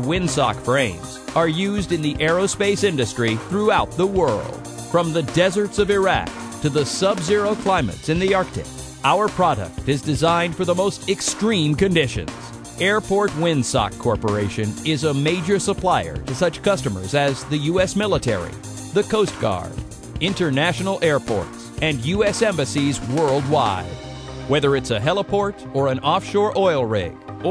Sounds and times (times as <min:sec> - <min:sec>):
Music: 0:00.0 - 0:27.5
Speech: 0:00.0 - 0:27.5.